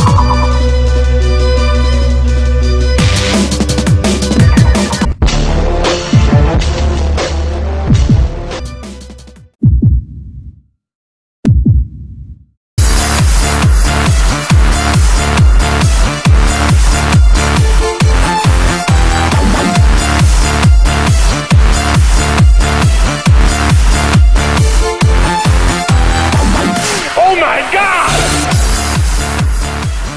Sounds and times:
Dubstep: 25.4 - 30.1.

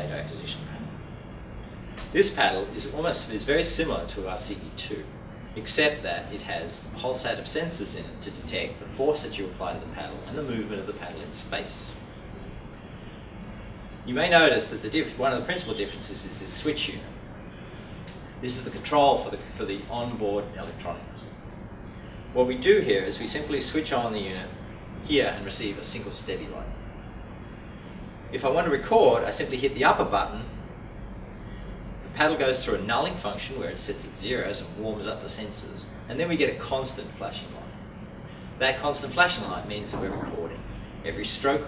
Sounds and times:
Speech: 0.0 - 1.0, 2.0 - 12.0, 14.1 - 17.2, 18.4 - 21.3, 22.4 - 26.8, 28.3 - 30.6, 32.1 - 37.8, 38.6 - 41.6.

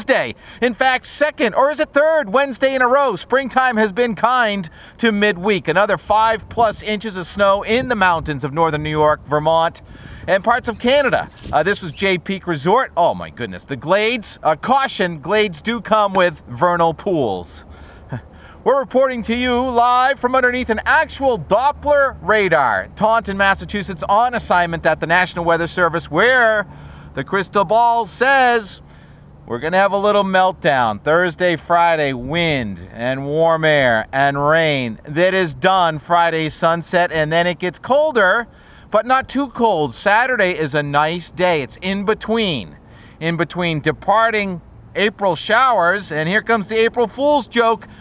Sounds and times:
Speech: 0.0 - 28.8, 29.5 - 47.9.

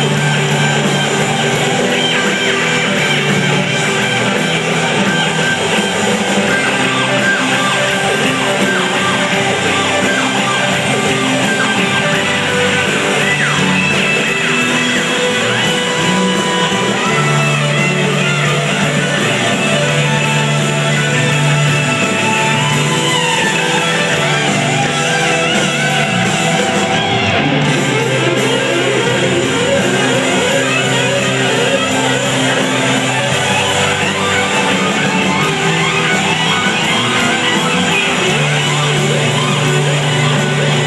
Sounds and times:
Inside, large room or hall: 0.0 - 40.8
Music: 0.0 - 40.8.

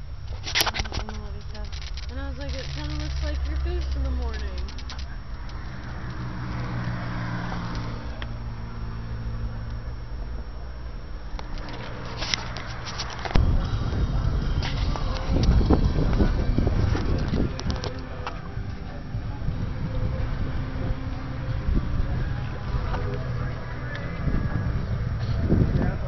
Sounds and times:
Music: 13.4 - 26.0.

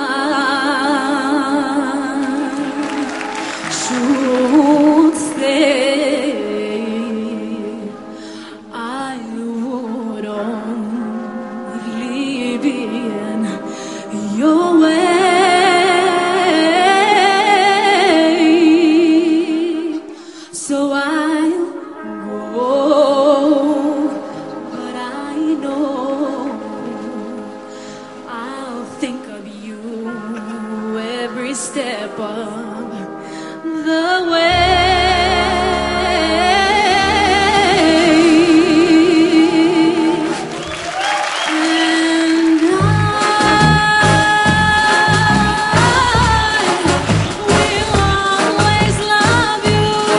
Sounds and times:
Independent music: 0.0 - 50.1.

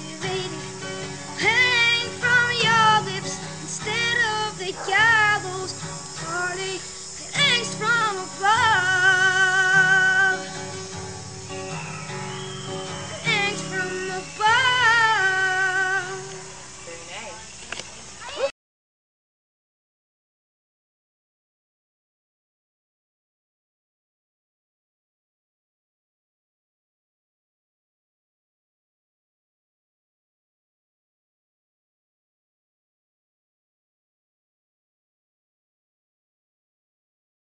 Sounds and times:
Child singing: 0.0 - 0.7, 1.4 - 10.4, 13.1 - 16.4
Music: 0.0 - 17.0.

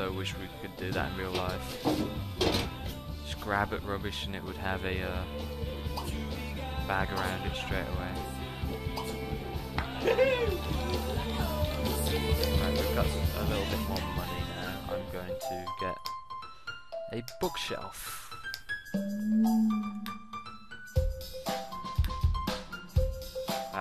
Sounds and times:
Speech: 0.0 - 1.7, 3.3 - 5.3, 6.9 - 8.2, 12.6 - 16.0, 17.1 - 18.3
Vibraphone: 18.9 - 20.8.

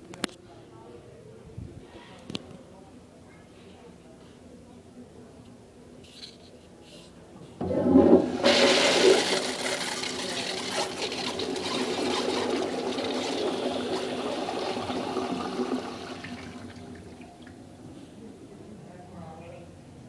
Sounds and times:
Toilet flush: 7.6 - 17.6
Water: 10.2 - 17.7.

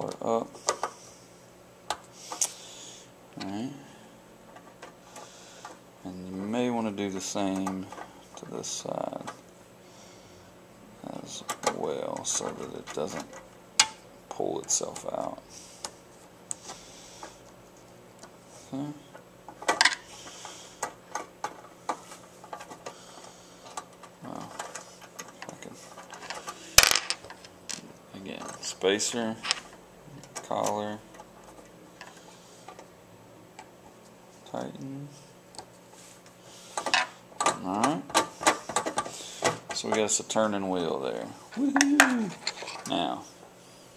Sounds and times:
Speech: 0.0 - 0.5, 6.0 - 9.4, 11.0 - 13.3, 14.3 - 15.4, 28.1 - 29.4, 30.4 - 31.0, 39.8 - 43.3.

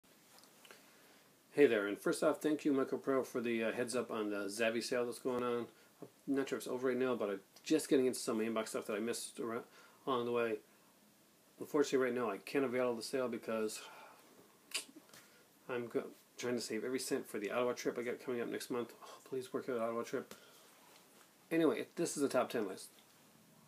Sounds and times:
Inside, small room: 0.0 - 23.6
Speech: 1.5 - 5.7, 6.3 - 10.6, 11.6 - 13.9, 15.7 - 20.3, 21.5 - 23.0.

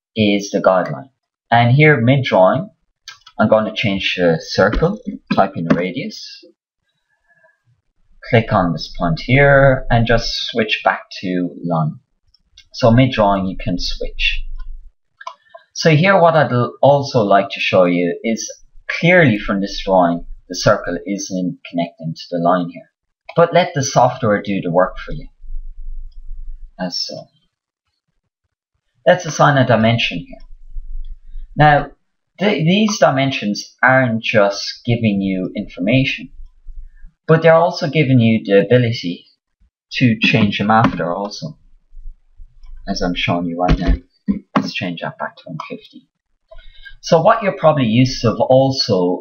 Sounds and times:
Speech: 0.2 - 6.5, 8.2 - 12.0, 12.6 - 14.4, 15.2 - 25.3, 26.8 - 27.2, 29.1 - 30.4, 31.6 - 36.3, 37.3 - 39.3, 39.9 - 41.5, 42.9 - 46.0, 46.8 - 49.2.

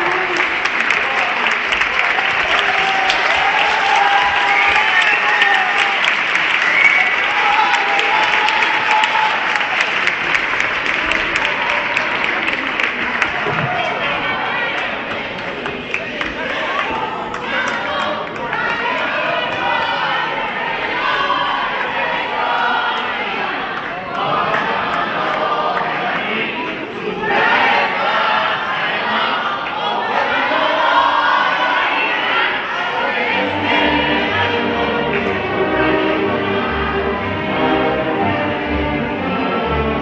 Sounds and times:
Inside, large room or hall: 0.0 - 40.0
Choir: 10.9 - 40.0
Orchestra: 30.2 - 40.0.

